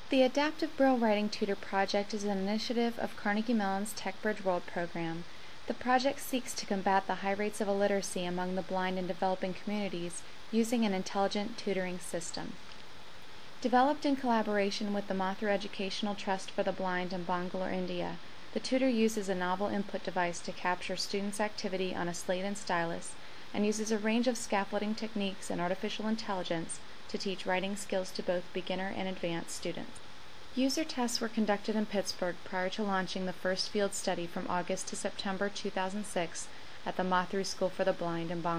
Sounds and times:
Speech: 0.1s - 12.6s, 13.6s - 30.0s, 30.6s - 38.5s.

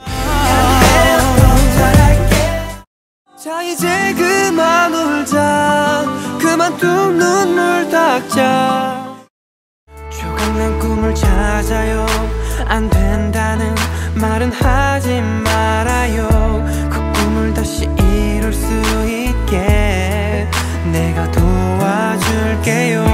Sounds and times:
Male singing: 0.0s - 9.3s, 10.0s - 23.1s
Music: 0.0s - 9.3s, 9.9s - 23.1s.

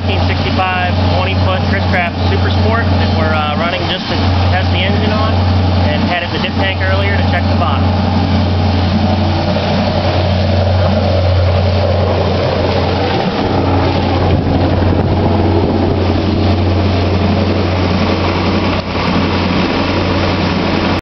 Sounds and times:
Idling: 0.0s - 21.0s
Medium engine (mid frequency): 0.0s - 21.0s
Vehicle: 0.0s - 21.0s.

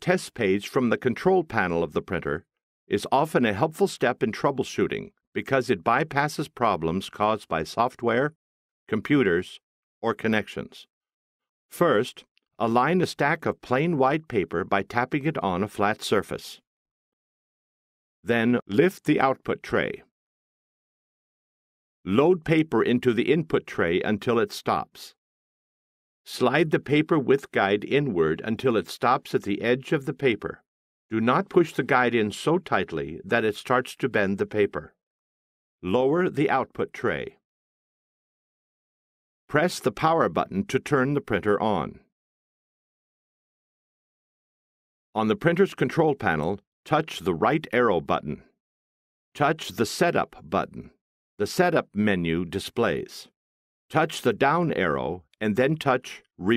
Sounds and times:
Speech: 0.0s - 10.9s, 11.7s - 16.6s, 18.3s - 20.1s, 22.1s - 25.2s, 26.3s - 35.0s, 35.8s - 37.4s, 39.5s - 42.1s, 45.2s - 48.5s, 49.4s - 53.3s, 53.9s - 56.5s.

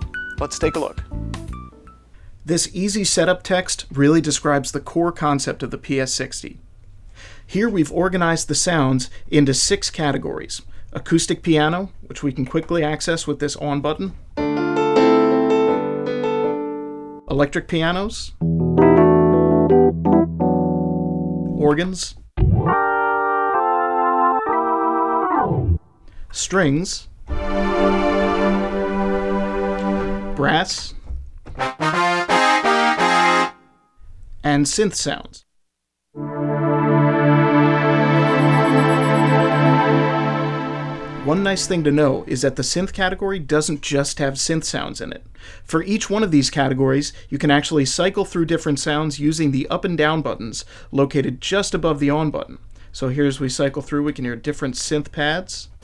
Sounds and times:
Music: 0.0s - 2.2s, 14.4s - 17.3s, 18.4s - 21.6s, 22.4s - 25.8s, 27.3s - 30.4s, 31.6s - 33.9s, 36.2s - 42.2s
Speech: 0.4s - 1.0s, 2.5s - 6.6s, 7.5s - 14.2s, 17.3s - 18.4s, 21.6s - 22.2s, 26.3s - 27.1s, 30.4s - 31.0s, 34.4s - 35.5s, 41.2s - 55.8s.

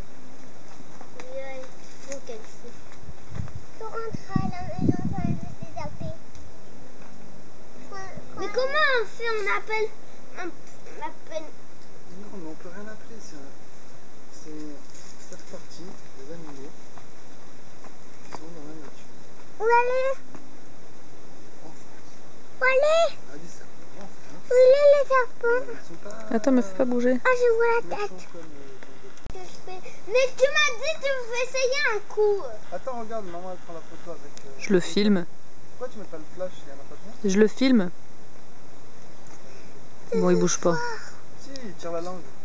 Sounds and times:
Outside, rural or natural: 0.0s - 42.4s.

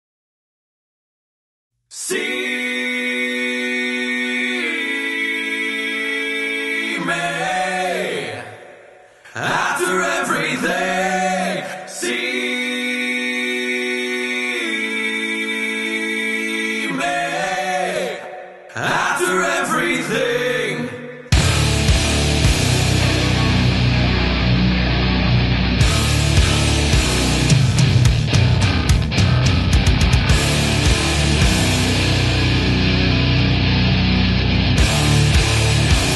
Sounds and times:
Music: 21.3s - 36.1s.

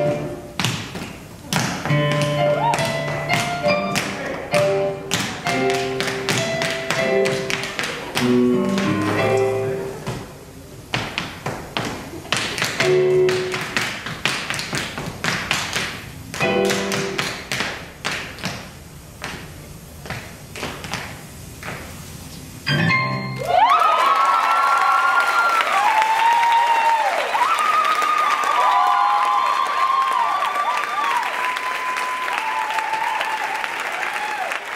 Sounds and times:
Music: 0.0s - 0.5s, 1.8s - 7.6s, 8.2s - 10.0s, 12.8s - 13.5s, 16.4s - 17.2s, 22.7s - 23.5s.

